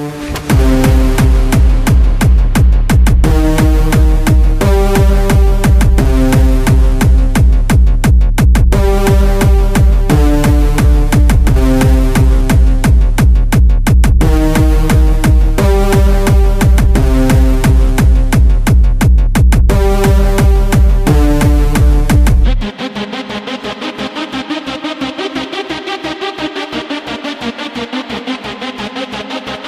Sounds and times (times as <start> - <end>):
Music: 0.0 - 29.6.